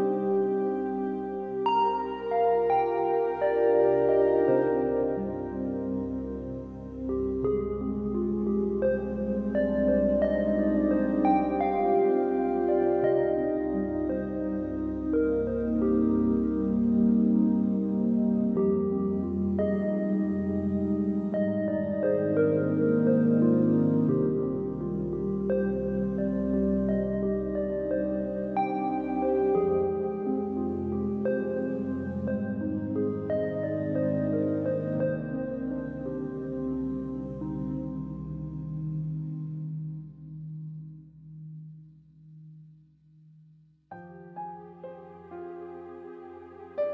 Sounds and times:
Piano: 0.0 - 41.9, 43.9 - 46.9.

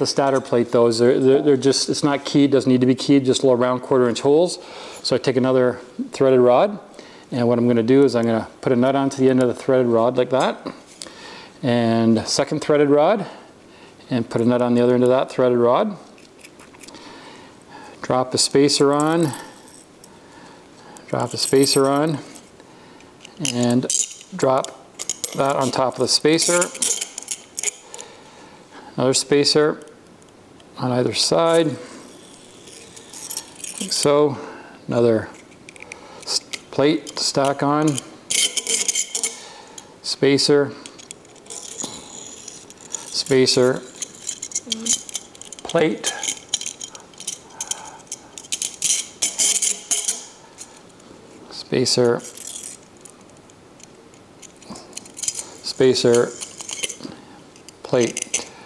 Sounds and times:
Speech: 0.0 - 10.8, 11.6 - 13.4, 14.1 - 16.1, 18.0 - 19.4, 25.4 - 26.8, 30.8 - 31.8, 40.0 - 40.8, 51.5 - 52.2, 55.7 - 56.4.

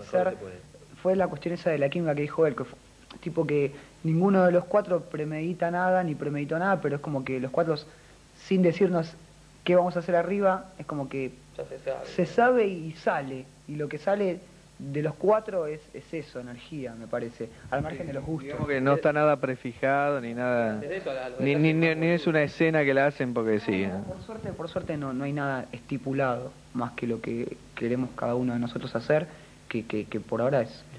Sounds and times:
Speech: 8.5 - 30.9.

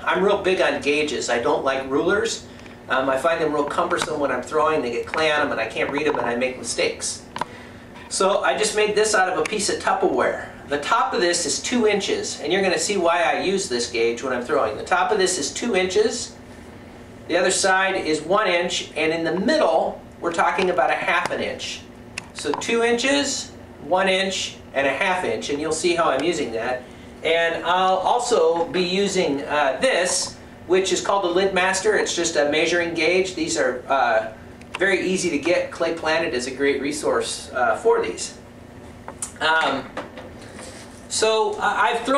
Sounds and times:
Speech: 0.0 - 7.3, 8.1 - 16.4, 17.3 - 38.4, 39.2 - 39.9, 41.1 - 42.1
Inside, small room: 0.0 - 42.1.

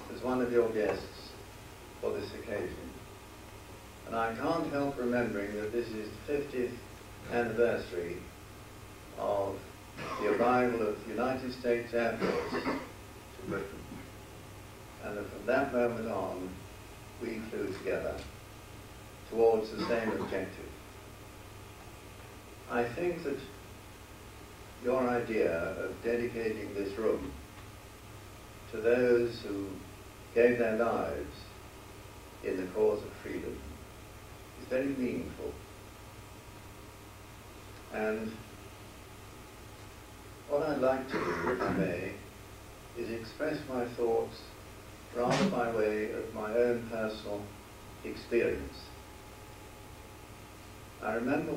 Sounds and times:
Male speech, man speaking: 0.0 - 1.4, 2.0 - 3.0, 4.1 - 8.3, 9.2 - 12.8, 13.4 - 13.9, 15.0 - 16.6, 17.2 - 18.3, 19.3 - 20.8, 22.7 - 23.6, 24.8 - 27.4, 28.7 - 29.8, 30.4 - 31.5, 32.4 - 33.7, 34.6 - 35.6, 37.9 - 38.4, 40.5 - 42.3, 43.0 - 44.6, 45.2 - 49.0, 51.0 - 51.5
Narration, monologue: 0.0 - 51.5.

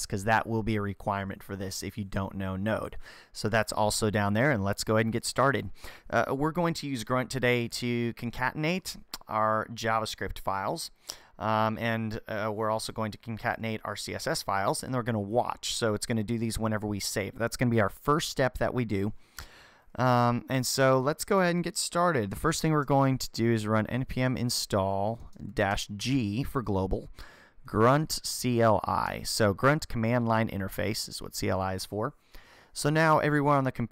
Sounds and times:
Speech: 0.0 - 19.2, 20.0 - 27.1, 27.7 - 32.2, 32.8 - 33.9.

